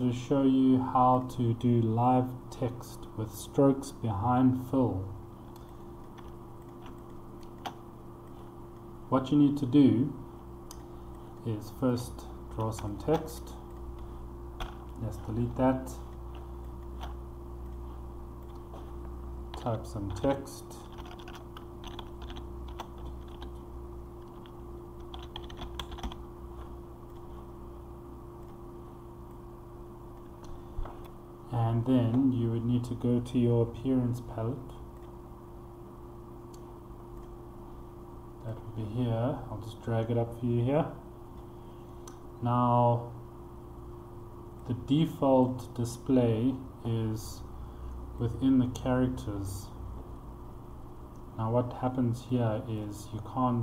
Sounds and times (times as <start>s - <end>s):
Speech: 0.0s - 5.2s, 9.1s - 10.2s, 11.4s - 13.6s, 15.0s - 16.1s, 19.6s - 20.9s, 31.5s - 34.8s, 38.4s - 41.0s, 42.4s - 43.2s, 44.6s - 47.5s, 48.2s - 49.8s, 51.4s - 53.6s.